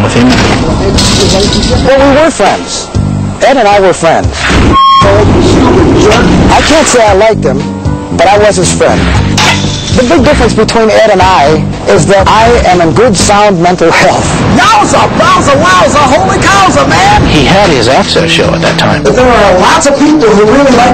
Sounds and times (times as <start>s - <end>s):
Music: 0.0s - 20.9s.